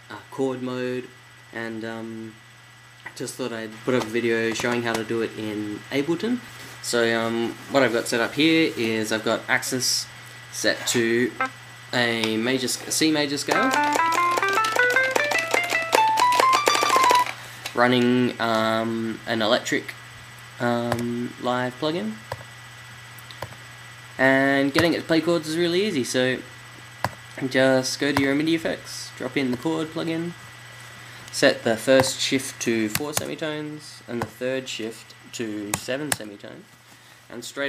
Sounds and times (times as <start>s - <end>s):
Speech: 0.1s - 2.4s, 3.1s - 13.8s, 17.8s - 20.0s, 20.6s - 22.2s, 24.2s - 26.5s, 27.4s - 30.4s, 31.3s - 36.7s, 37.3s - 37.6s
Musical instrument: 13.6s - 17.4s.